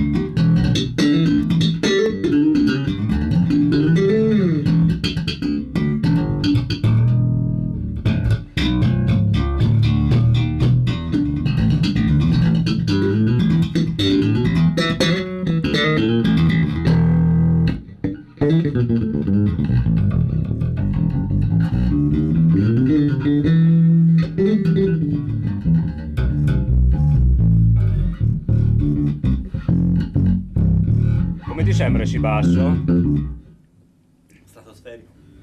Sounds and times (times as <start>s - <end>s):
Bass guitar: 0.0s - 33.7s.